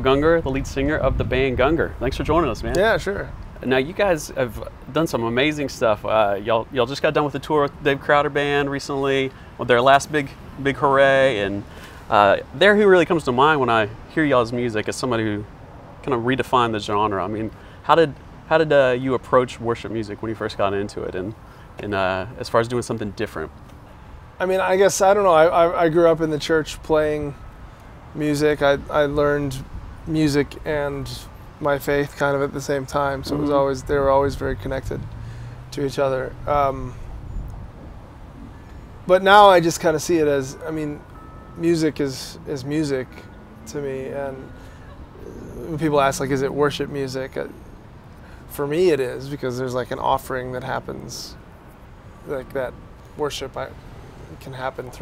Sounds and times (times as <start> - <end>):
Speech: 0.0 - 23.5, 24.4 - 27.4, 28.2 - 35.0, 35.7 - 37.0, 39.1 - 41.0, 41.6 - 44.5, 45.2 - 47.5, 48.5 - 51.4, 52.2 - 55.0.